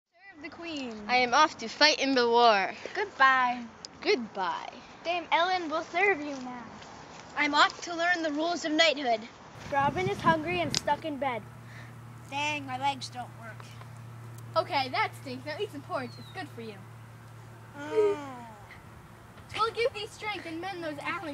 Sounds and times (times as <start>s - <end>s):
Speech: 7.4s - 11.4s, 14.6s - 16.8s.